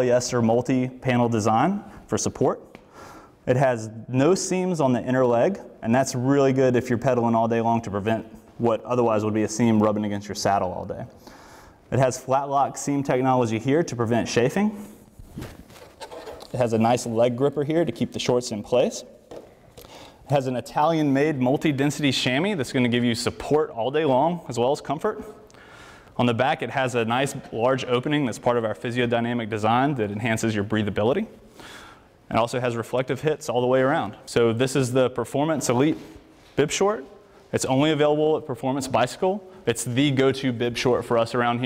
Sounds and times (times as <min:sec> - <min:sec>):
Speech: 0:00.0 - 0:02.7, 0:03.5 - 0:11.2, 0:11.9 - 0:14.8, 0:16.5 - 0:19.2, 0:20.3 - 0:25.4, 0:26.2 - 0:31.4, 0:32.3 - 0:41.6.